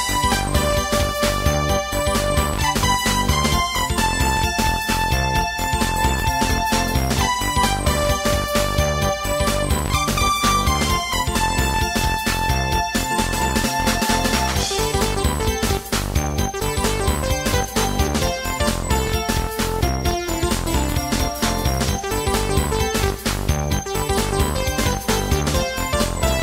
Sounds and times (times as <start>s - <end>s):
Video game music: 0.0s - 26.4s.